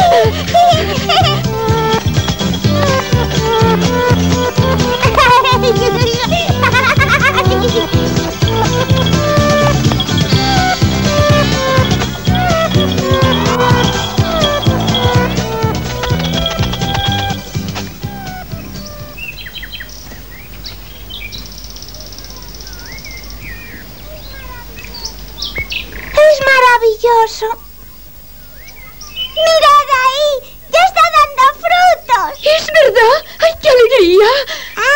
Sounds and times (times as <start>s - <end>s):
Music: 0.0s - 19.3s
Environmental noise: 0.0s - 34.9s
Chirp, tweet: 18.2s - 26.2s, 27.6s - 29.6s.